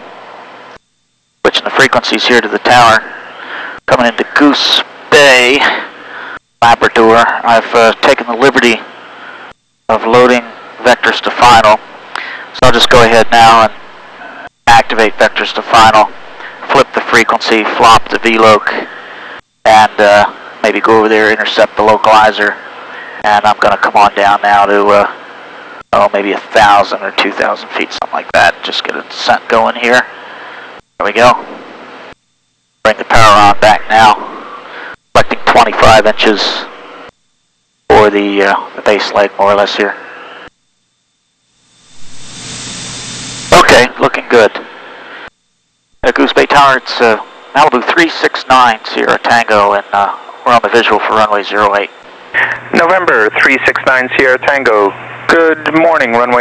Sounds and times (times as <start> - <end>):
Speech: 1.4 - 3.1, 3.9 - 5.9, 6.6 - 8.9, 9.9 - 11.8, 12.5 - 13.8, 14.4 - 18.9, 19.6 - 25.2, 25.9 - 30.2, 31.0 - 31.5, 32.8 - 34.4, 35.1 - 36.7, 37.9 - 40.0, 43.5 - 44.7, 46.0 - 56.4.